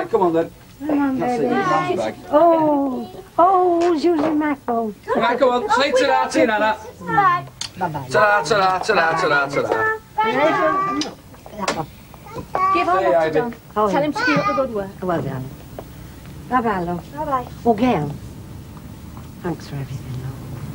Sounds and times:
Child speech, kid speaking: 0.9s - 4.6s, 6.8s - 7.5s, 9.0s - 13.3s, 13.9s - 14.9s, 17.2s - 17.6s.

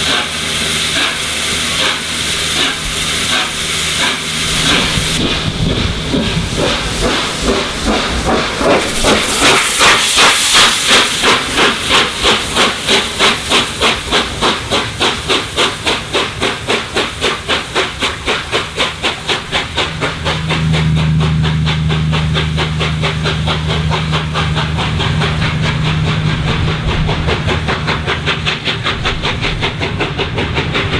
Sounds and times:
Hiss: 0.0s - 31.0s
Outside, urban or manmade: 0.0s - 31.0s
Train: 0.0s - 31.0s.

